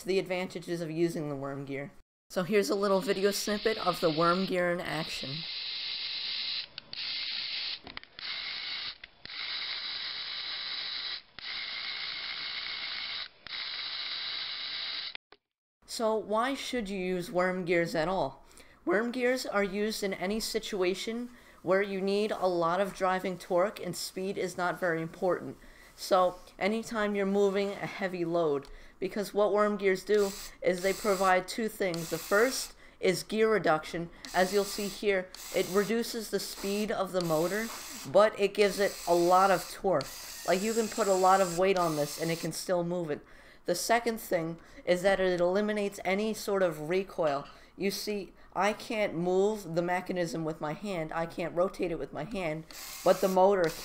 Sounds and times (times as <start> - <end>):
Gears: 5.5 - 15.2, 34.3 - 38.1, 38.7 - 42.5, 52.7 - 53.8
Ratchet, pawl: 5.5 - 15.2, 34.3 - 35.8, 38.8 - 41.2, 52.7 - 53.8.